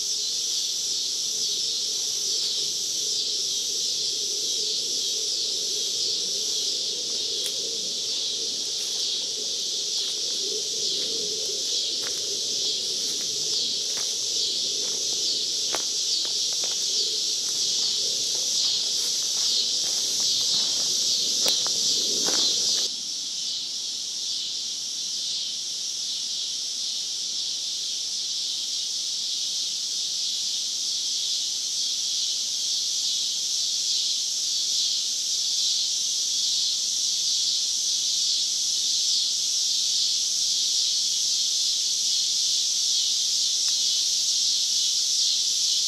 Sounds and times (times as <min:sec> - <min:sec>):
Outside, rural or natural: 0:00.0 - 0:45.8
Walk, footsteps: 0:12.0 - 0:12.2, 0:13.9 - 0:14.2, 0:15.7 - 0:22.9.